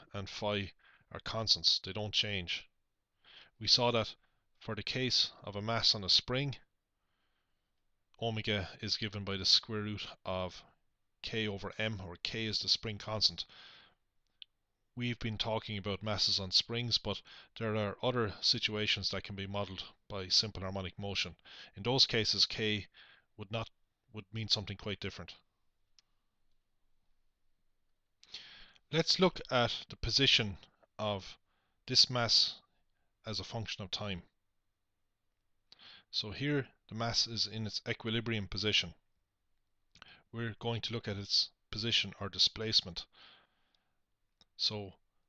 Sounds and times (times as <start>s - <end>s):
Speech: 0.0s - 2.7s, 3.6s - 6.7s, 8.2s - 13.5s, 15.0s - 25.5s, 28.9s - 34.4s, 36.1s - 39.0s, 40.3s - 43.1s, 44.6s - 45.0s.